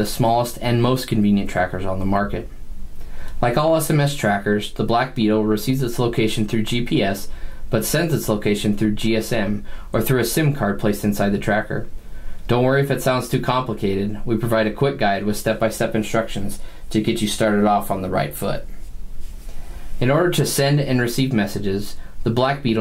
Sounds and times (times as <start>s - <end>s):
Speech: 0.0s - 2.6s, 3.4s - 11.9s, 12.5s - 18.8s, 20.0s - 22.8s.